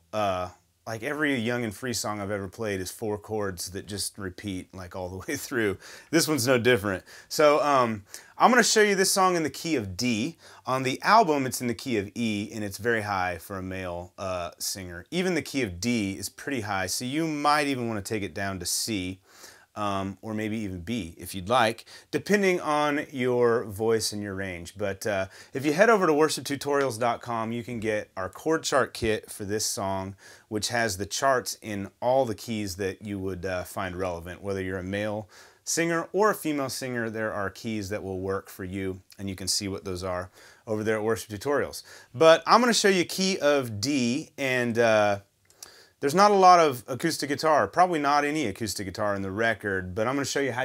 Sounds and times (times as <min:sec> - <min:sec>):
Speech: 0:00.0 - 0:19.2, 0:19.8 - 0:45.3, 0:46.0 - 0:50.6.